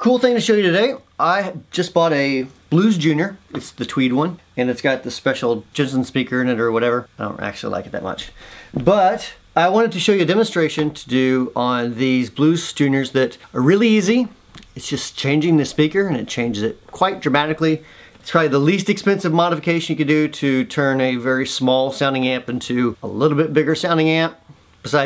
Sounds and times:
Speech: 0.0 - 25.0.

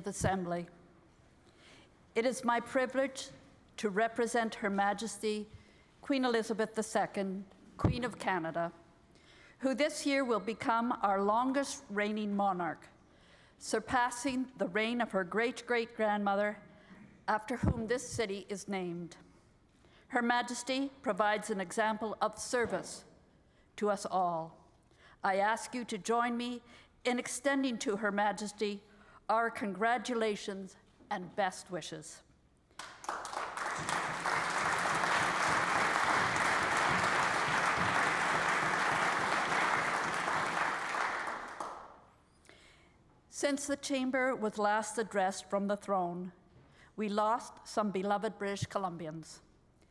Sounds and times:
Female speech, woman speaking: 0.0 - 0.7, 2.2 - 8.8, 9.6 - 12.9, 13.6 - 16.6, 17.3 - 19.2, 20.1 - 23.1, 23.8 - 24.5, 25.2 - 32.2, 43.4 - 46.4, 47.0 - 49.4
Narration, monologue: 0.0 - 33.0, 41.8 - 49.9.

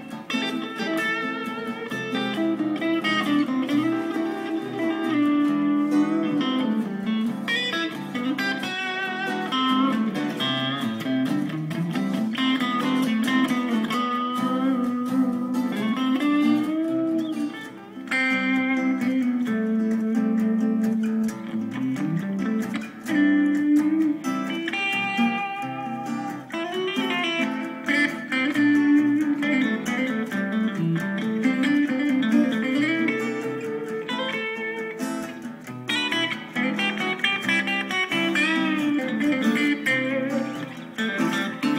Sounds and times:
Electric guitar: 0.0 - 41.7.

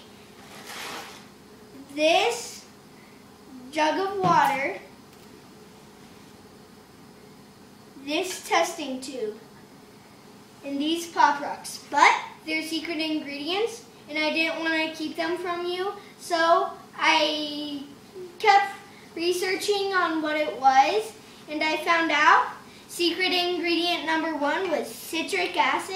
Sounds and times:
Speech: 1.8 - 2.7, 3.6 - 4.9, 8.0 - 9.4, 10.6 - 25.9.

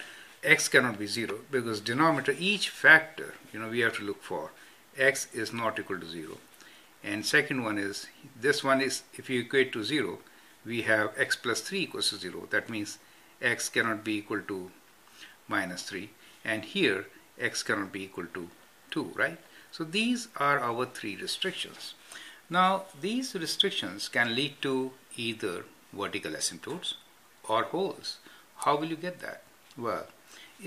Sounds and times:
Inside, small room: 0.0 - 30.6
Speech: 0.4 - 14.8, 15.5 - 30.6.

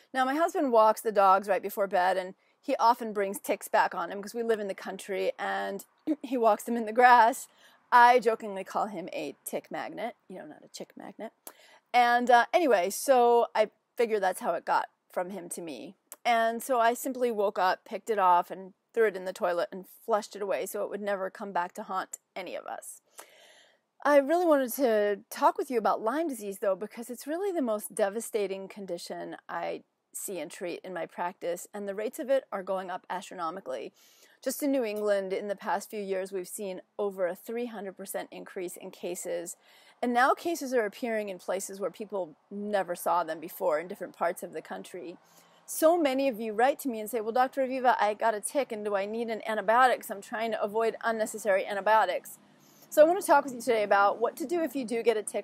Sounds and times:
Speech: 0.1 - 11.4, 12.0 - 23.0, 24.0 - 52.4, 53.0 - 55.4.

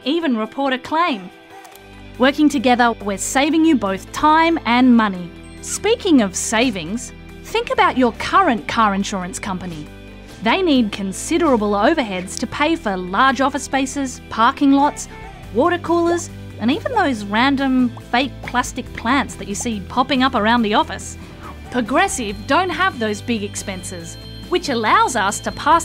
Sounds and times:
Speech: 0.0 - 1.3, 2.2 - 25.8
Music: 0.0 - 25.8.

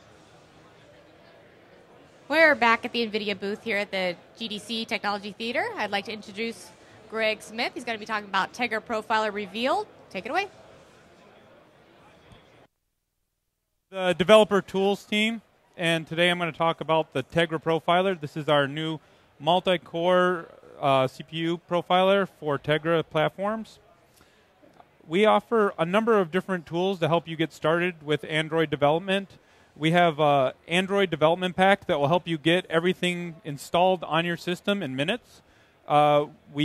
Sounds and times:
Speech: 25.1 - 35.3.

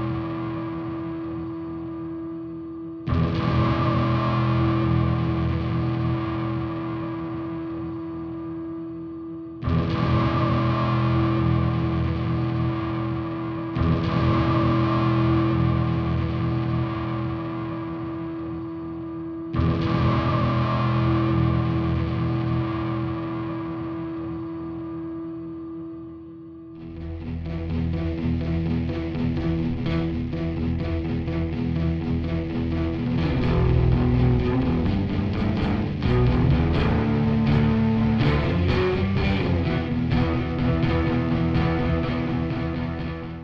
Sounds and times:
Electric guitar: 0.0 - 43.4.

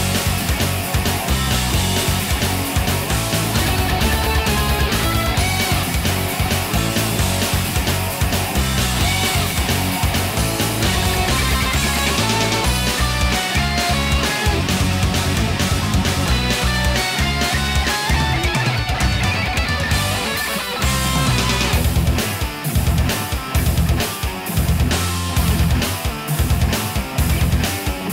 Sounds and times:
Music: 0.0 - 28.1.

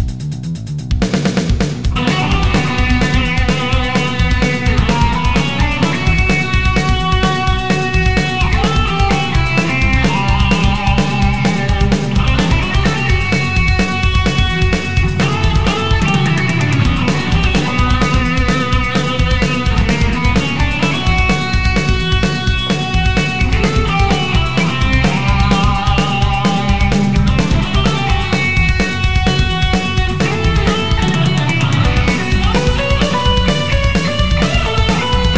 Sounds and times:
Electric guitar: 1.2 - 35.3
Strum: 1.3 - 35.3.

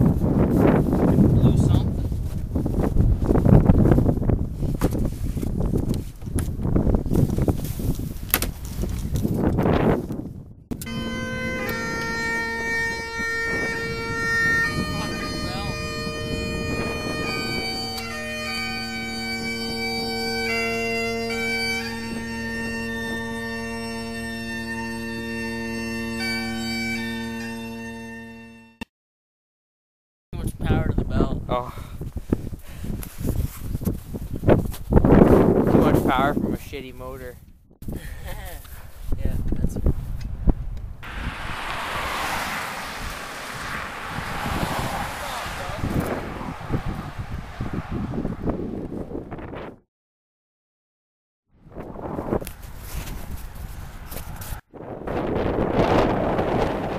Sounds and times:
Speech: 1.1 - 2.0, 30.4 - 31.8, 35.7 - 37.4, 39.2 - 39.8
Music: 10.8 - 28.8.

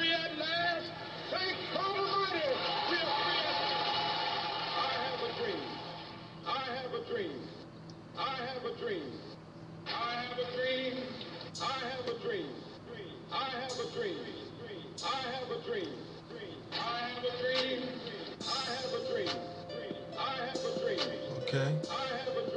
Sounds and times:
Male speech, man speaking: 0.0 - 3.6, 4.8 - 5.7, 6.5 - 7.6, 8.2 - 9.3, 9.9 - 17.8, 20.2 - 22.4.

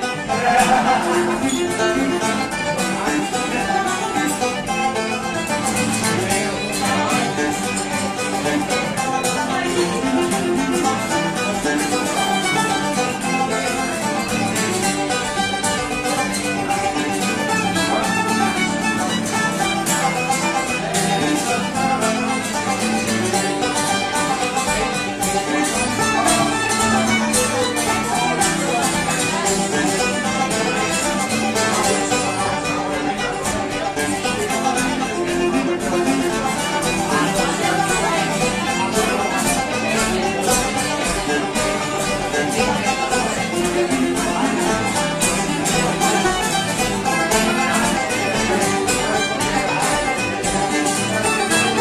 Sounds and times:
Music: 0.0 - 51.8.

